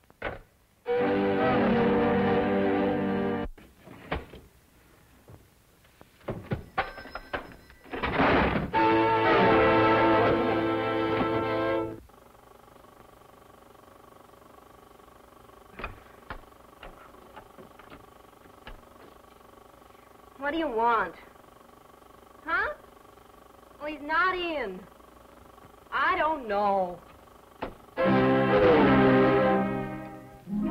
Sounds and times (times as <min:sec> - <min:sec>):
Music: 0:00.8 - 0:03.5, 0:08.7 - 0:12.0, 0:28.0 - 0:30.7
Telephone bell ringing: 0:06.7 - 0:07.9.